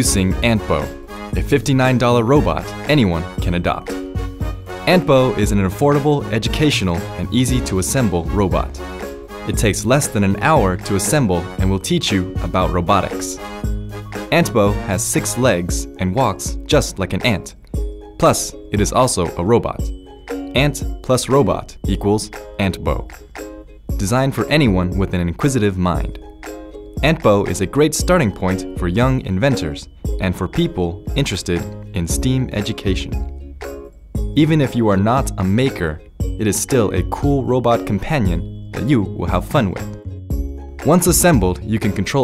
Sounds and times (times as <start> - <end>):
Speech: 0.0 - 3.9, 4.9 - 8.8, 9.5 - 13.4, 14.3 - 17.6, 18.2 - 19.9, 20.6 - 23.1, 24.0 - 26.2, 27.0 - 33.2, 34.4 - 39.9, 40.8 - 42.2
Music: 0.0 - 42.2.